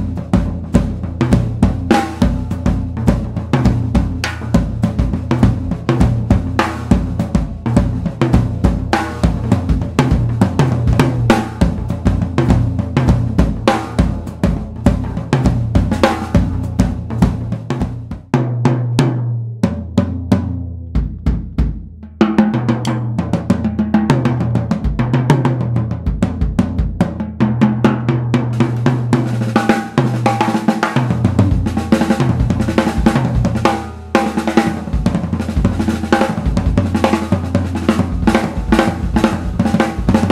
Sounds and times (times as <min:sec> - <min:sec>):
Bass drum: 0:00.0 - 0:40.3
Drum kit: 0:00.0 - 0:40.3.